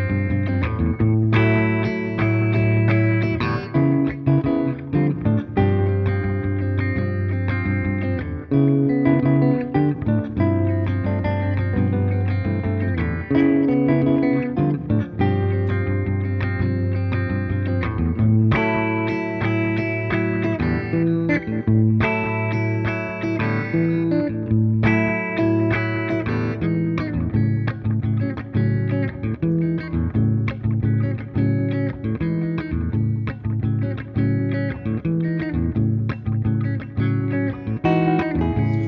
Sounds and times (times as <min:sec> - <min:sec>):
Guitar: 0:00.0 - 0:38.8.